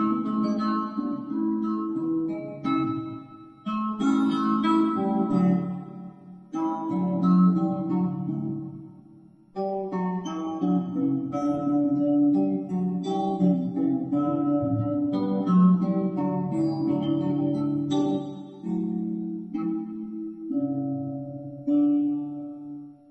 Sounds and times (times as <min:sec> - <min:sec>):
Acoustic guitar: 0:00.0 - 0:09.0, 0:09.6 - 0:23.1
Strum: 0:09.6 - 0:23.0.